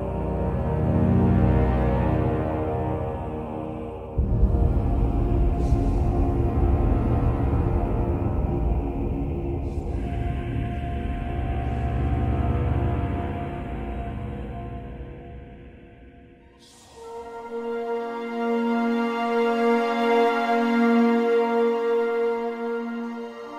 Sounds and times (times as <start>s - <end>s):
Scary music: 0.0s - 23.5s.